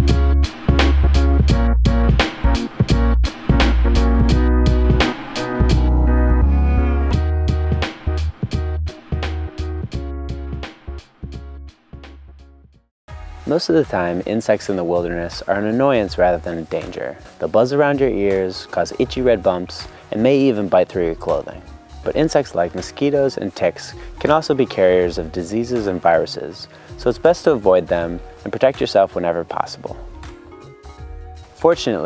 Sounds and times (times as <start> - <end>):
Music: 0.0 - 32.0
Speech: 13.5 - 30.0, 31.6 - 32.0.